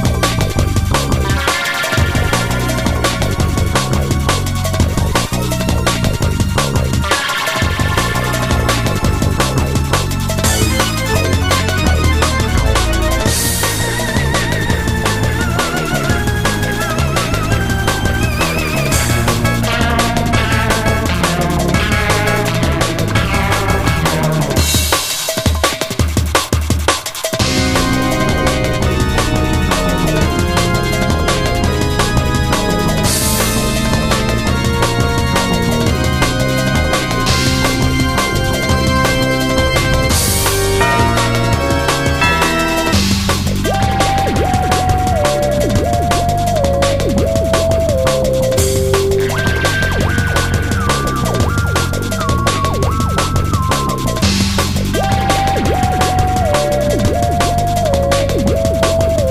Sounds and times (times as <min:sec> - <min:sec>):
Exciting music: 0:00.0 - 0:59.3.